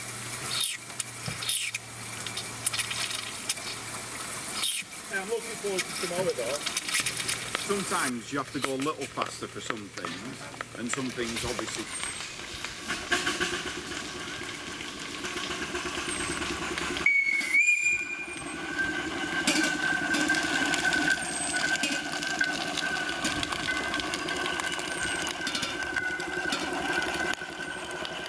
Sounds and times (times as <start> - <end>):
Outside, urban or manmade: 0.0 - 28.2
Speech: 5.1 - 6.7, 7.7 - 11.9.